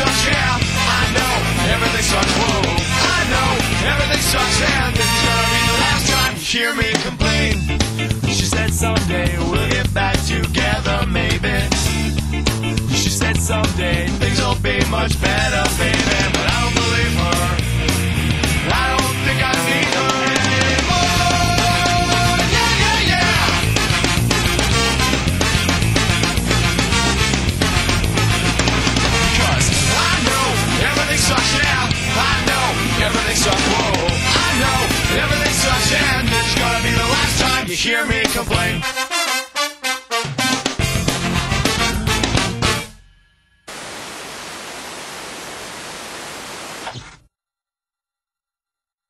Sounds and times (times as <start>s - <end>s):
Music: 0.0s - 43.7s
Pink noise: 43.7s - 47.2s.